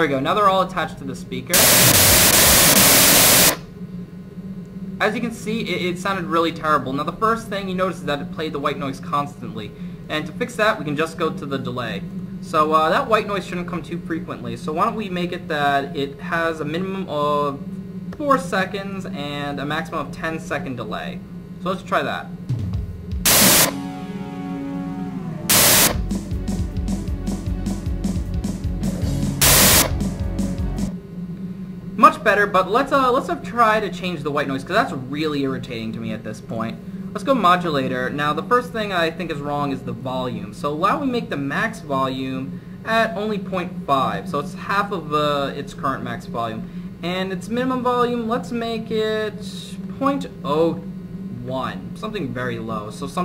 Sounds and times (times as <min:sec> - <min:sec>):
Speech: 0:00.0 - 0:01.6, 0:05.0 - 0:17.6, 0:18.2 - 0:22.4, 0:32.0 - 0:50.8, 0:51.4 - 0:53.2
Sound effect: 0:01.6 - 0:03.7, 0:23.3 - 0:26.1, 0:29.4 - 0:30.0.